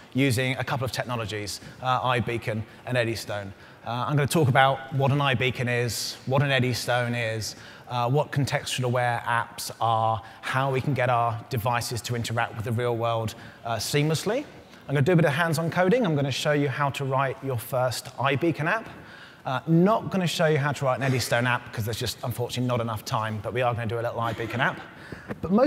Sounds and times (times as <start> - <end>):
Speech: 0.2 - 18.9, 19.5 - 25.6.